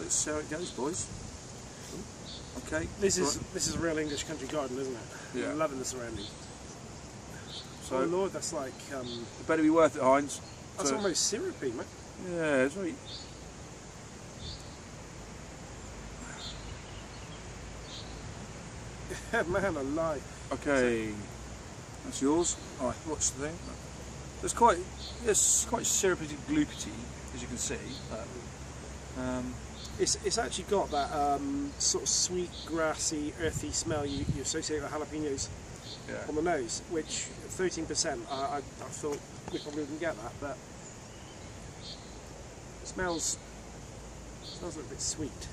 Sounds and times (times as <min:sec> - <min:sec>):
Speech: 0:00.0 - 0:01.1, 0:02.6 - 0:06.3, 0:07.8 - 0:13.0, 0:19.1 - 0:21.3, 0:22.0 - 0:23.8, 0:24.4 - 0:28.5, 0:29.2 - 0:35.5, 0:36.1 - 0:40.6, 0:42.9 - 0:43.4, 0:44.6 - 0:45.5
Outside, rural or natural: 0:00.0 - 0:45.5.